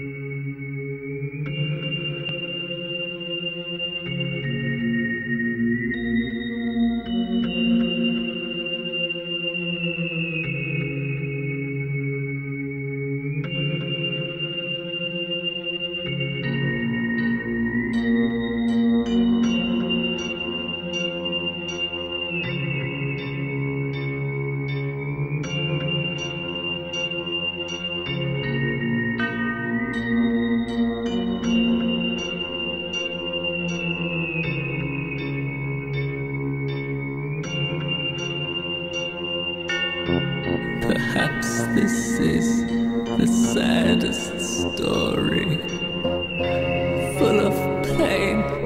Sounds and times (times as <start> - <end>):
Music: 0.0 - 48.6
Speech: 40.7 - 45.8, 47.0 - 48.6.